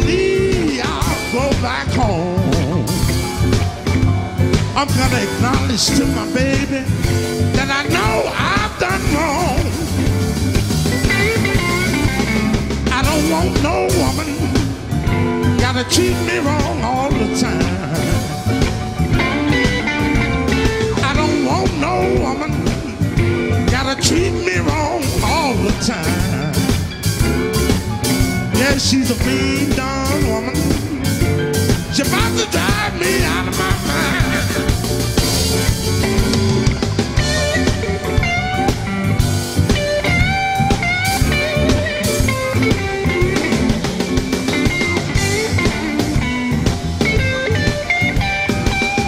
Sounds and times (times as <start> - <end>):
Blues: 0.0 - 49.0
Guitar: 0.0 - 49.0
Ska: 0.0 - 49.0
Song: 0.0 - 49.0.